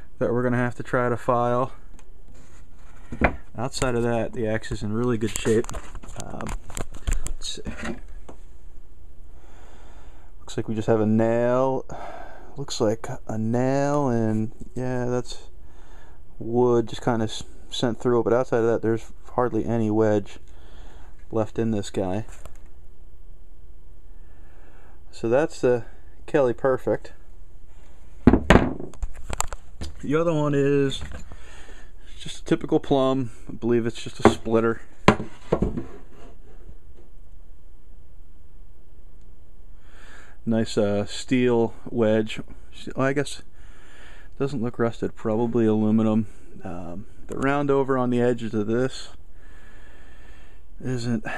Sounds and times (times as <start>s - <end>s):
Speech: 0.2s - 1.8s, 3.6s - 6.6s, 7.4s - 8.0s, 10.5s - 12.0s, 12.6s - 15.5s, 16.4s - 20.4s, 21.3s - 22.3s, 25.1s - 27.2s, 30.0s - 31.0s, 32.1s - 34.9s, 40.5s - 43.5s, 44.4s - 49.2s, 50.8s - 51.3s.